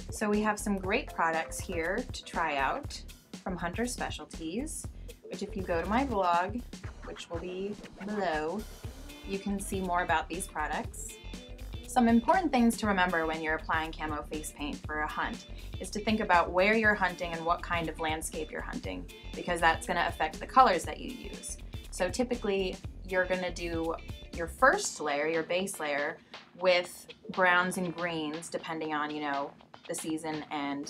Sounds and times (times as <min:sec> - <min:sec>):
Music: 0:00.0 - 0:30.9
Speech: 0:00.1 - 0:08.7, 0:09.3 - 0:11.2, 0:11.9 - 0:30.9.